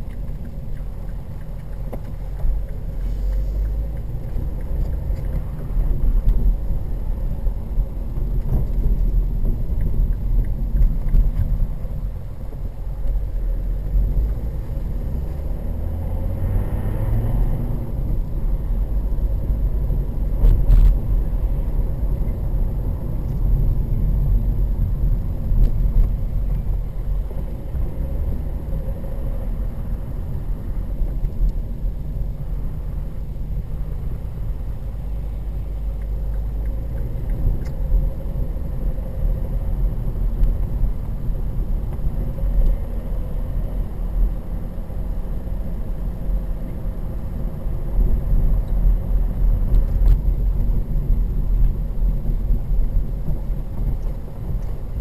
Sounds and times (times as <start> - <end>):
Vehicle: 0.0 - 55.0.